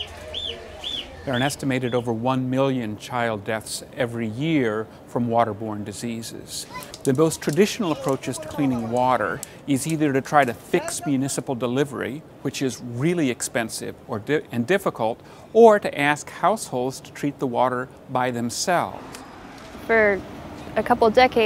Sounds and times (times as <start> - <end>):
Speech: 0.6 - 18.9.